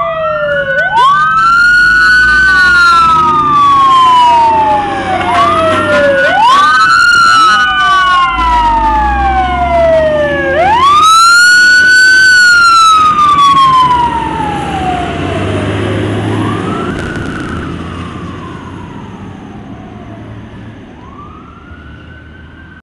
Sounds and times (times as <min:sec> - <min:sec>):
Fire engine, fire truck (siren): 0:00.0 - 0:22.8
Truck: 0:00.0 - 0:22.8.